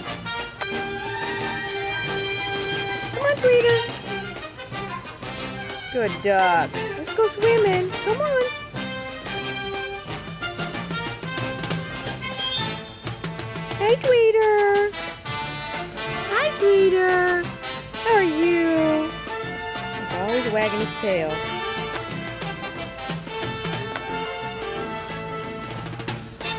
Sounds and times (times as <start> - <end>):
Music: 0.0 - 26.5
Speech: 3.1 - 3.9, 6.0 - 8.6, 13.8 - 14.9, 16.3 - 19.2, 20.1 - 21.4.